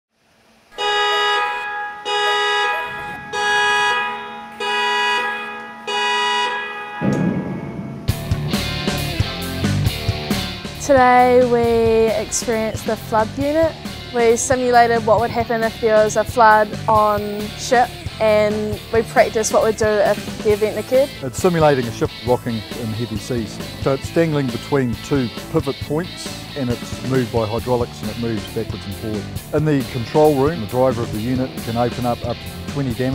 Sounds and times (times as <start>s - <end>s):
Music: 7.0s - 33.1s.